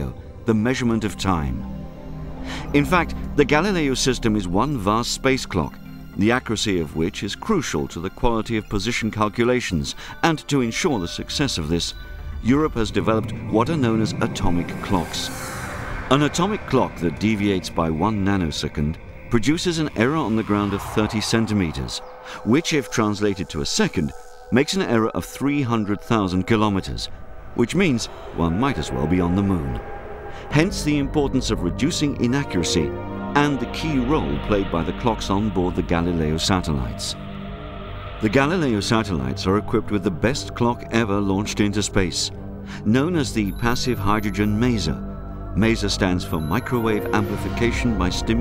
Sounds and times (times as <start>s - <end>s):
Speech: 0.0s - 1.6s, 2.7s - 15.5s, 16.1s - 29.9s, 30.5s - 37.2s, 38.2s - 45.0s, 45.6s - 48.4s
Music: 0.0s - 48.4s.